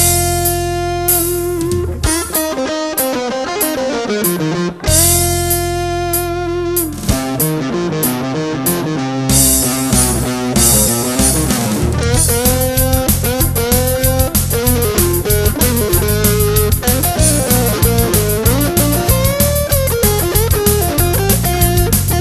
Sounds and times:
Strum: 0:00.0 - 0:22.2.

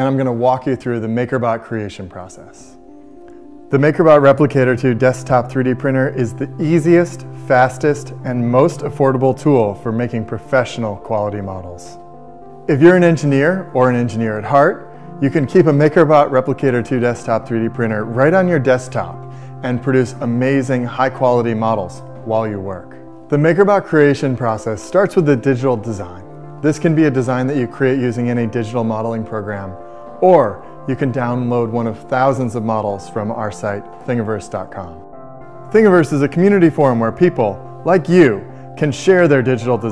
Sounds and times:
Speech: 0:00.0 - 0:02.8, 0:03.7 - 0:12.0, 0:12.7 - 0:35.0, 0:35.7 - 0:39.9
Music: 0:00.0 - 0:39.9.

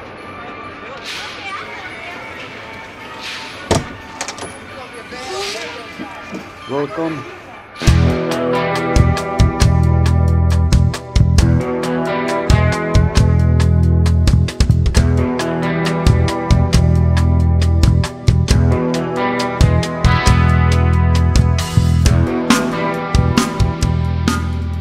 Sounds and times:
Speech: 0:00.3 - 0:03.1, 0:04.5 - 0:07.8
Music: 0:07.8 - 0:24.8.

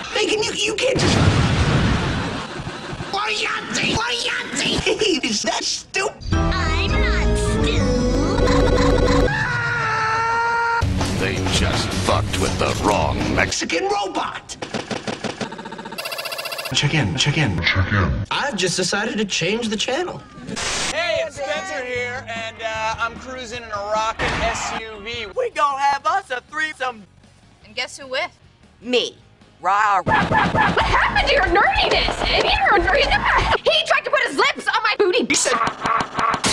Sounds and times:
Music: 0:06.2 - 0:09.4, 0:10.8 - 0:13.6, 0:21.0 - 0:33.6
Speech: 0:11.2 - 0:14.6.

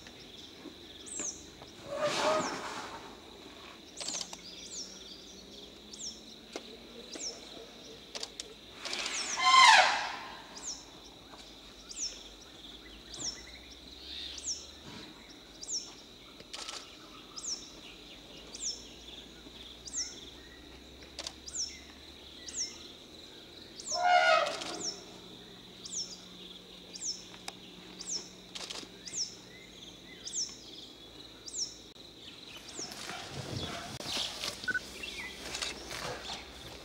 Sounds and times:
Bird vocalization, bird call, bird song: 0:00.0 - 0:02.8, 0:03.7 - 0:36.8
Environmental noise: 0:00.0 - 0:36.8.

